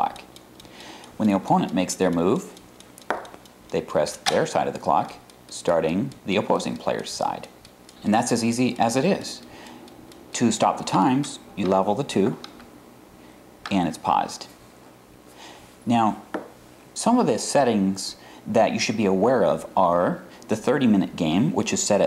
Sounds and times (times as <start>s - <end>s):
Speech: 0.0s - 0.3s, 1.2s - 2.6s, 3.7s - 9.5s, 10.4s - 12.5s, 13.7s - 14.6s, 15.8s - 16.3s, 17.0s - 22.0s
Tick-tock: 0.0s - 12.7s.